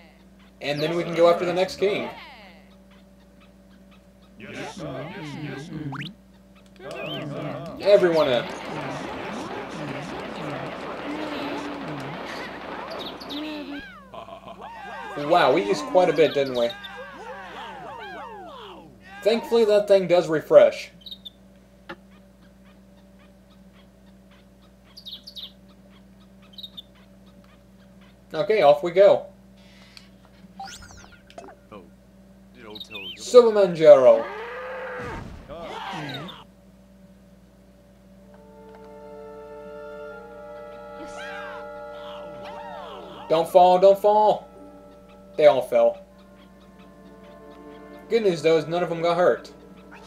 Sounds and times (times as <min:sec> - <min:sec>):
Speech: 0:00.0 - 0:02.6, 0:04.4 - 0:05.9, 0:06.8 - 0:12.2, 0:14.7 - 0:17.0, 0:18.7 - 0:20.9, 0:43.2 - 0:44.4.